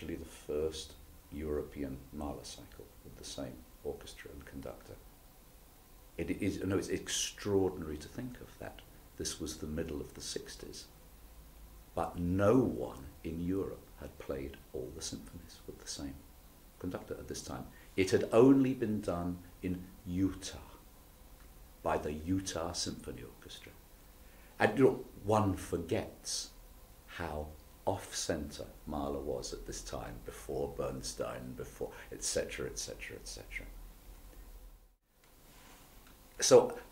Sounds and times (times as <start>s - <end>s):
Speech: 0.0s - 5.0s, 6.2s - 10.9s, 12.0s - 20.8s, 21.8s - 23.8s, 24.6s - 33.8s, 36.4s - 36.9s.